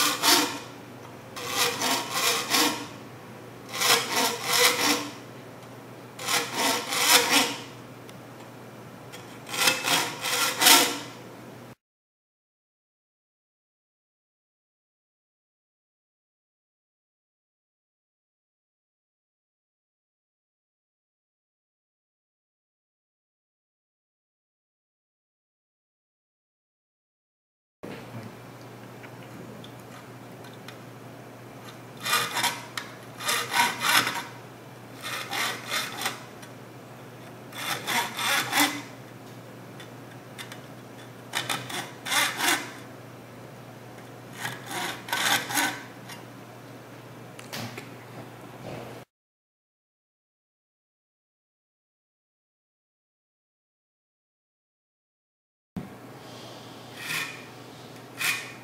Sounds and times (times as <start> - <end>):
Filing (rasp): 0.0 - 0.7, 1.4 - 3.0, 3.7 - 5.3, 6.2 - 7.7, 9.2 - 11.2, 32.0 - 34.4, 35.0 - 36.3, 37.5 - 39.0, 41.3 - 42.9, 44.3 - 46.0, 56.9 - 58.6
Rub: 1.4 - 2.9, 32.0 - 34.4, 35.0 - 36.3, 37.6 - 38.9, 44.4 - 45.8, 56.9 - 58.6.